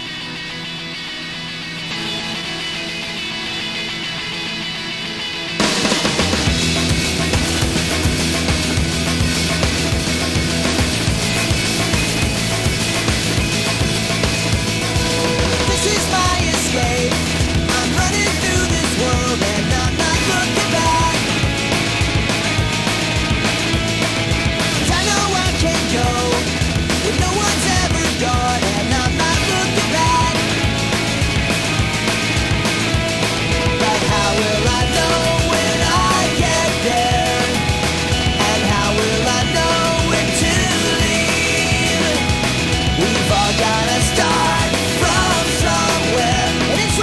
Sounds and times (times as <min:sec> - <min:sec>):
Music: 0:00.0 - 0:47.0.